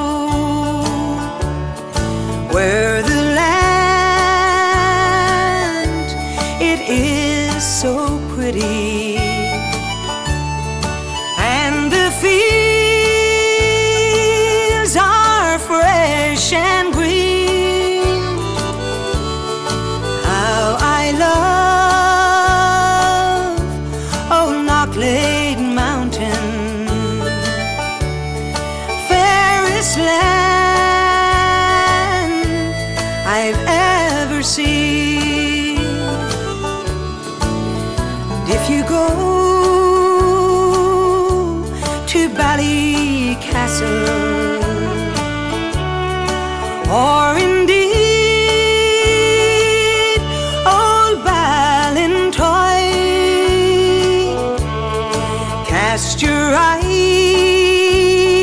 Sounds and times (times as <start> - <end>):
Country: 0.0 - 58.4.